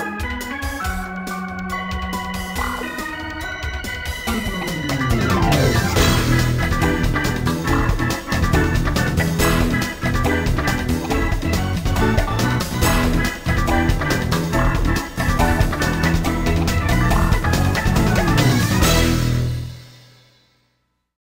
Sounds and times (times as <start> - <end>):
Video game music: 0.0 - 19.8.